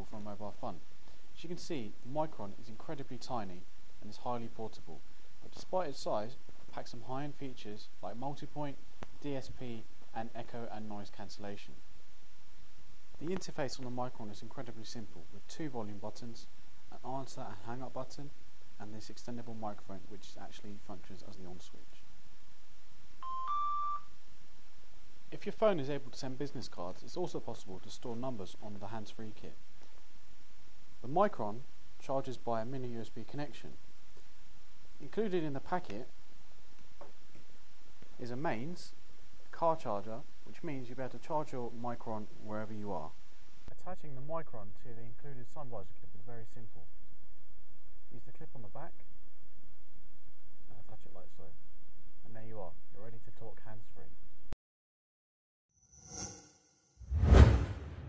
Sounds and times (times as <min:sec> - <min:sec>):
Speech: 0:00.0 - 0:00.8, 0:01.4 - 0:11.8, 0:13.2 - 0:22.1, 0:25.4 - 0:29.6, 0:31.0 - 0:33.8, 0:35.0 - 0:36.1, 0:38.2 - 0:46.9, 0:48.1 - 0:49.1, 0:50.7 - 0:51.6, 0:52.2 - 0:54.2.